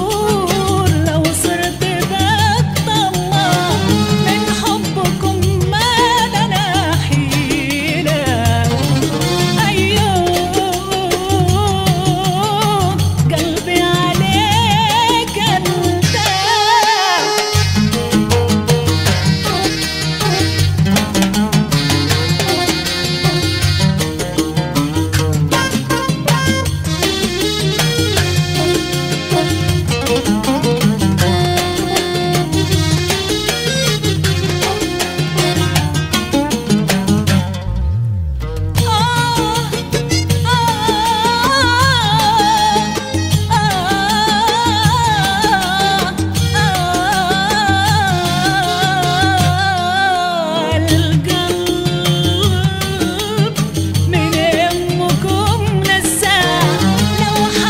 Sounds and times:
Middle Eastern music: 0.0s - 57.7s.

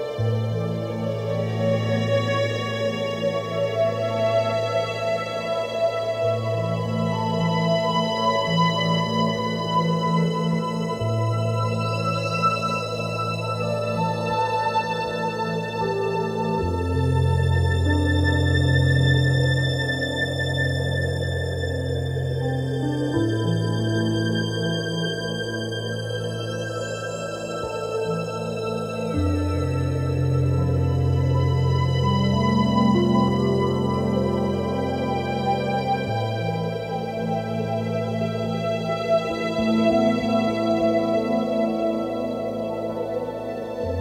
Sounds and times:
Ambient music: 0.0s - 44.0s.

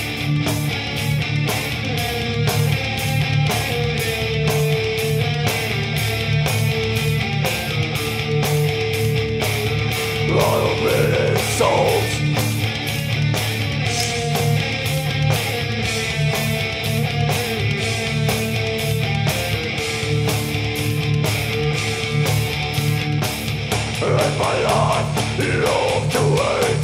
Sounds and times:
Heavy metal: 0.0s - 26.8s.

